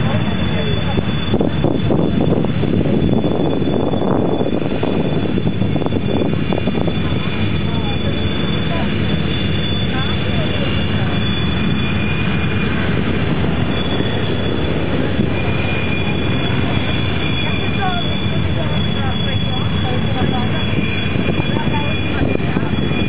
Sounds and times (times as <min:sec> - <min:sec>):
Speech: 0:00.0 - 0:03.2, 0:06.8 - 0:11.6, 0:15.2 - 0:23.0
Fixed-wing aircraft, airplane: 0:00.0 - 0:23.0.